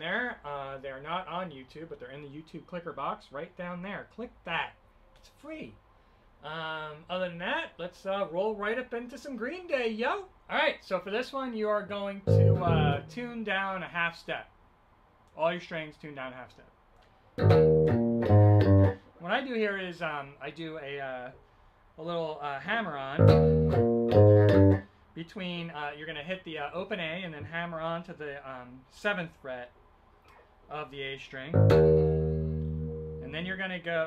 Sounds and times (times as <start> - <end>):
Speech: 0.0 - 5.8, 6.4 - 14.5, 15.3 - 16.8, 19.2 - 21.4, 22.0 - 23.2, 25.2 - 29.8, 30.7 - 31.6, 33.2 - 34.0.